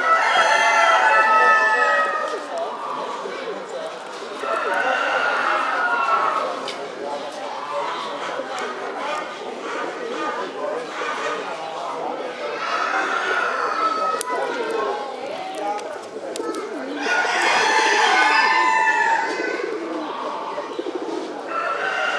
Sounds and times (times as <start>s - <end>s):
Speech: 0.0s - 22.1s.